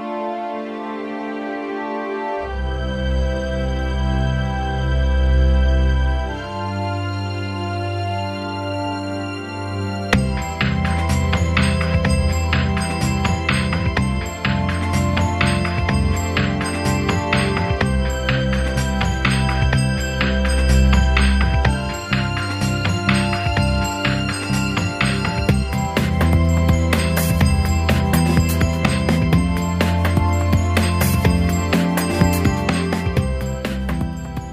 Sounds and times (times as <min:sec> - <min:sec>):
Music: 0:00.0 - 0:34.5.